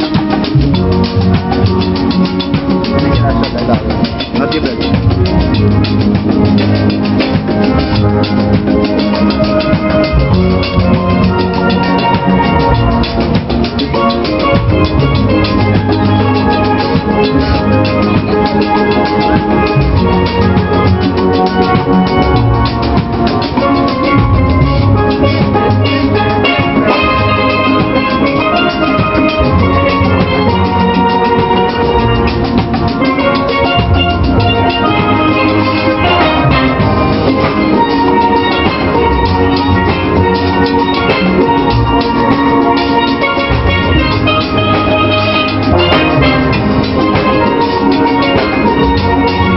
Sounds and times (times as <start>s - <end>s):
Music: 0.0s - 49.5s
Speech: 3.0s - 5.0s.